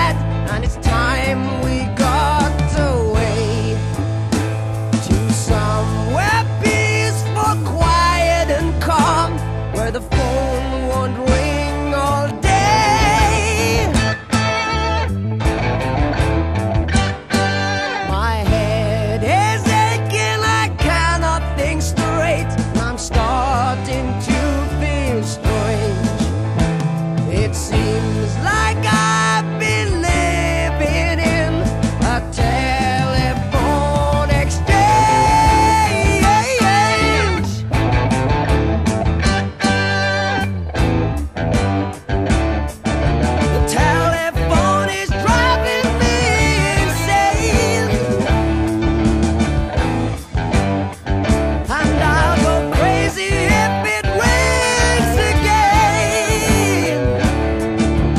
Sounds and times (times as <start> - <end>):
Music: 0.0 - 58.1.